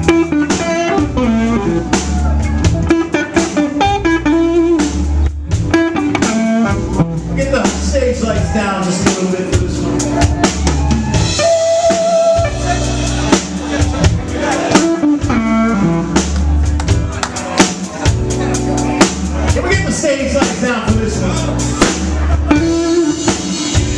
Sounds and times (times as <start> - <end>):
Music: 0.0 - 23.9
Speech: 7.3 - 9.7, 19.5 - 21.7.